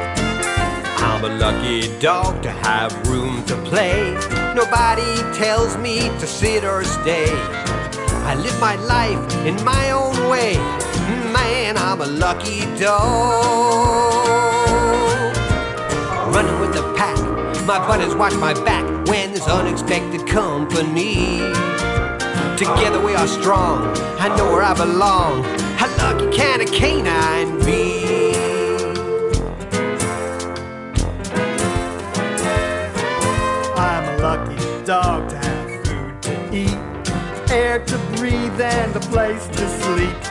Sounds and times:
Music: 0.0 - 40.3.

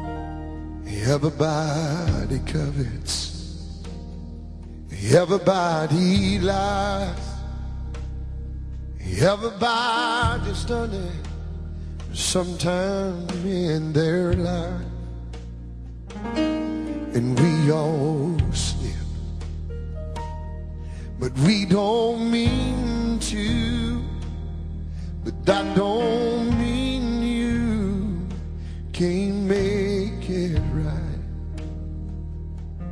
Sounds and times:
Music: 0.0 - 32.9.

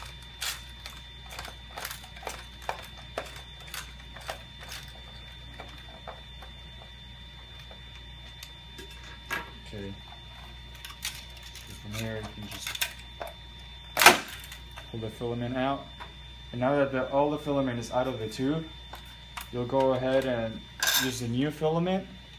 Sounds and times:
Speech: 11.8 - 12.7, 14.9 - 15.9, 16.6 - 18.7, 19.5 - 22.2.

